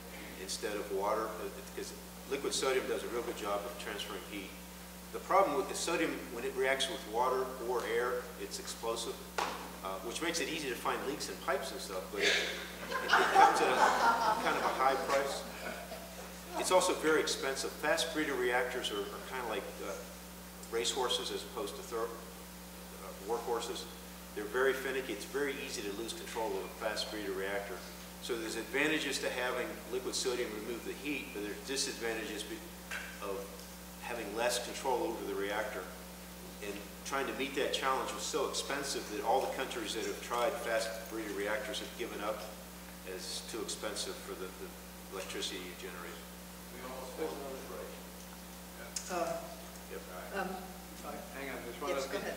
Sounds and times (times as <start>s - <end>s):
Speech: 0.4s - 4.6s, 5.2s - 9.2s, 9.8s - 12.5s, 13.3s - 15.5s, 16.5s - 20.0s, 20.7s - 22.2s, 23.0s - 32.6s, 33.2s - 36.0s, 36.6s - 42.5s, 43.1s - 48.0s, 48.8s - 52.3s.